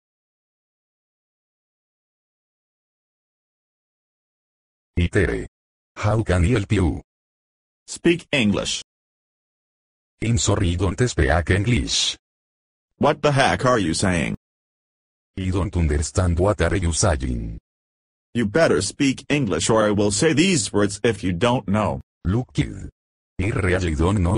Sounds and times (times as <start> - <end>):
Speech: 5.0 - 7.1, 7.9 - 8.9, 10.2 - 12.2, 13.0 - 14.4, 15.4 - 17.6, 18.4 - 24.3.